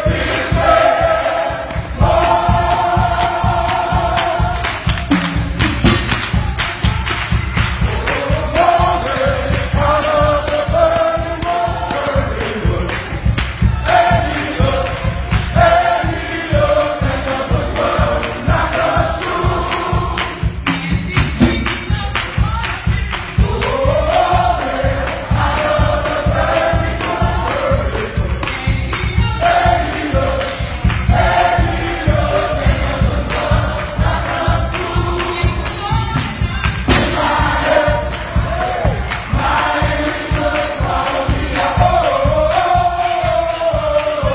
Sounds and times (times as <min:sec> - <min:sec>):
Tambourine: 0:00.0 - 0:44.3.